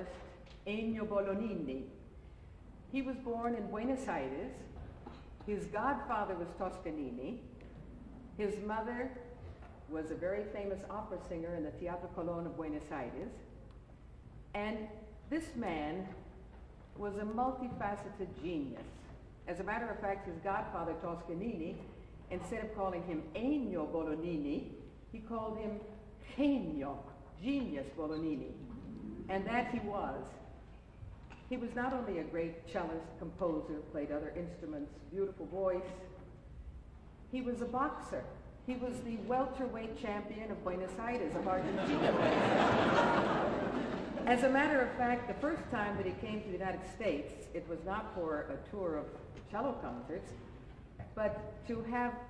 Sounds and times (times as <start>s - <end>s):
Speech: 0.0s - 1.9s, 3.0s - 4.7s, 14.6s - 16.2s, 17.0s - 28.6s, 29.3s - 30.4s, 31.5s - 36.1s, 37.4s - 42.3s, 44.3s - 50.5s, 51.1s - 52.3s.